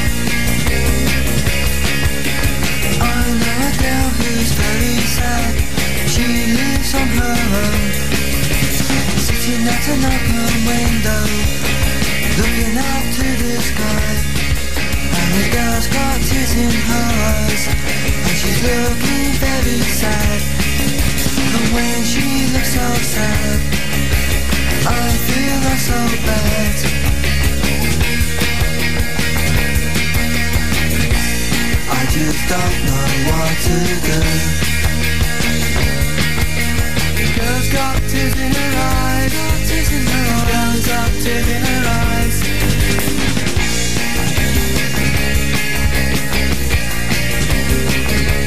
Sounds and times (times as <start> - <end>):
Music: 0.0 - 48.4.